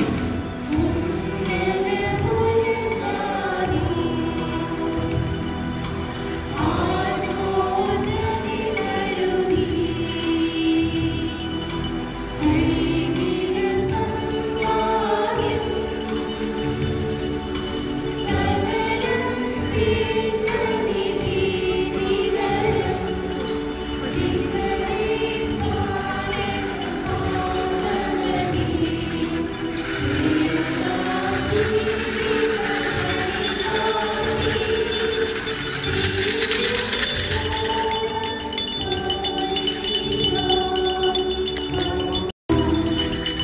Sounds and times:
Singing: 0:00.0 - 0:43.4
Tambourine: 0:00.0 - 0:43.4.

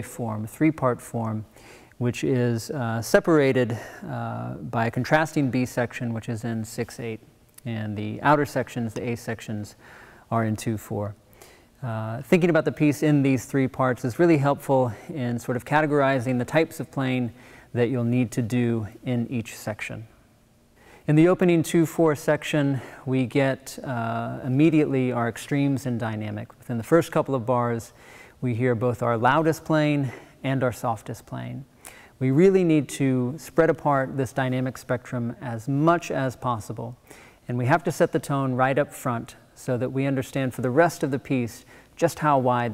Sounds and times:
Speech: 0:00.0 - 0:11.2, 0:11.8 - 0:20.1, 0:21.1 - 0:42.7.

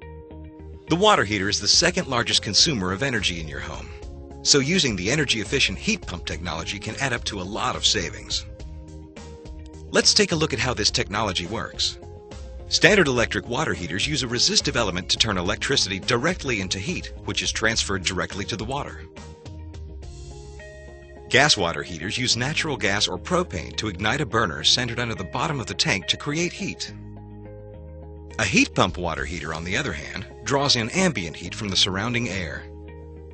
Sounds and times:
Music: 0:00.0 - 0:33.3
Speech: 0:00.9 - 0:08.5, 0:09.9 - 0:12.0, 0:12.7 - 0:19.1, 0:21.3 - 0:27.0, 0:28.4 - 0:32.7.

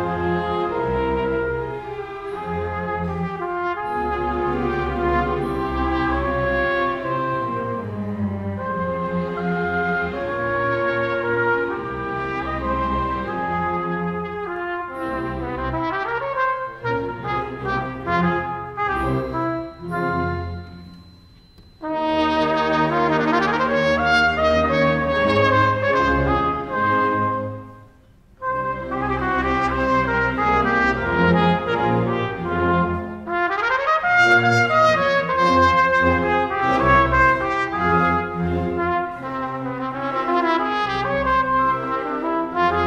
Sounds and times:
Trumpet: 0:00.0 - 0:42.8.

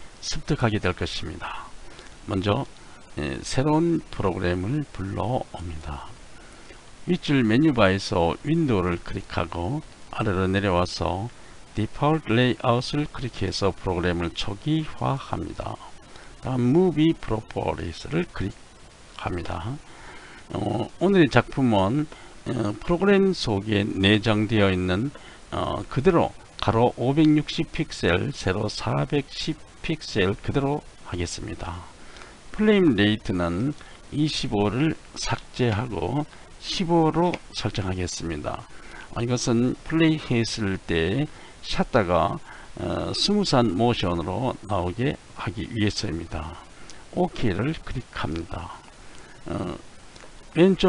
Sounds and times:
Speech: 0:00.2 - 0:01.7, 0:02.3 - 0:06.2, 0:07.0 - 0:18.6, 0:19.2 - 0:19.8, 0:20.5 - 0:31.9, 0:32.5 - 0:49.8, 0:50.6 - 0:50.8.

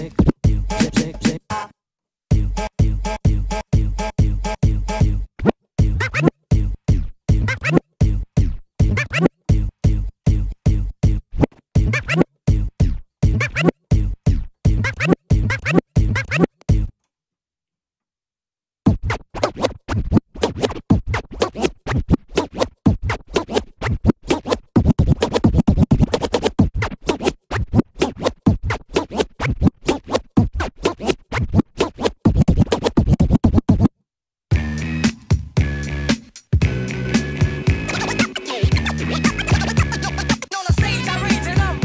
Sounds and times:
Scratching (performance technique): 0:00.0 - 0:01.7, 0:02.3 - 0:16.9, 0:18.8 - 0:33.9, 0:34.5 - 0:41.8.

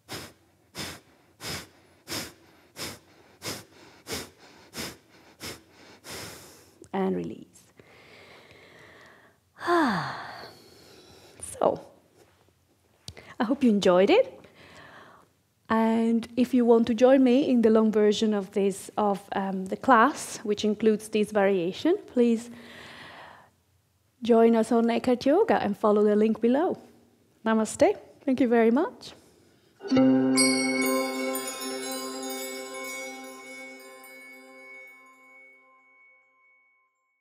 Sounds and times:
Inside, small room: 0:00.0 - 0:37.2
Speech: 0:06.9 - 0:07.6, 0:11.4 - 0:12.0, 0:15.7 - 0:22.6, 0:24.2 - 0:29.2
Music: 0:29.8 - 0:37.1.

